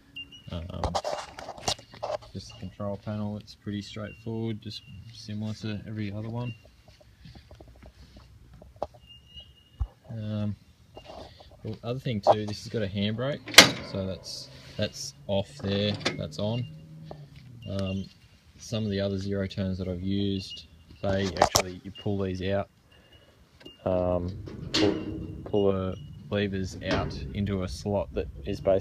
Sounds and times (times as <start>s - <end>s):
Speech: 0.5s - 1.0s, 2.3s - 6.6s, 10.1s - 10.6s, 11.6s - 16.7s, 17.6s - 22.7s, 23.8s - 28.8s.